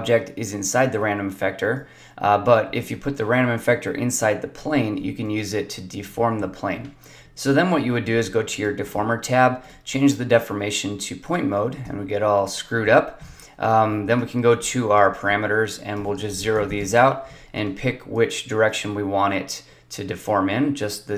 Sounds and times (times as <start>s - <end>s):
Speech: 0.0s - 21.1s.